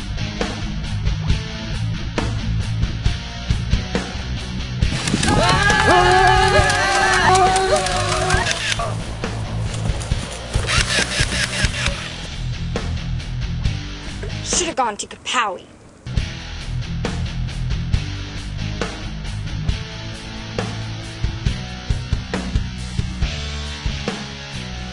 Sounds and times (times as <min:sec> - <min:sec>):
Music: 0:00.0 - 0:15.0, 0:16.0 - 0:24.9
Speech: 0:14.4 - 0:15.7.